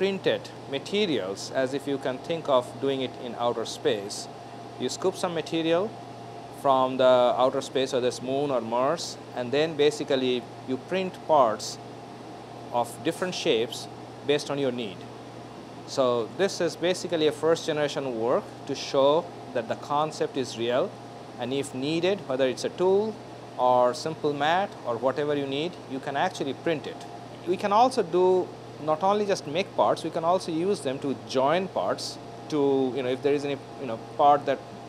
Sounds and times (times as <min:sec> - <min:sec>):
Speech: 0:00.0 - 0:06.0, 0:06.6 - 0:11.8, 0:12.7 - 0:15.1, 0:15.9 - 0:34.7.